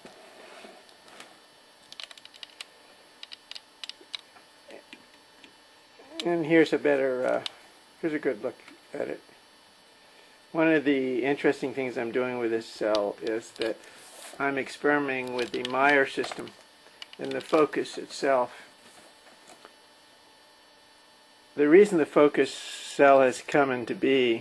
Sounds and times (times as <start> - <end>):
Speech: 6.0 - 9.2, 10.6 - 13.8, 14.4 - 16.6, 17.2 - 18.6, 21.6 - 24.4.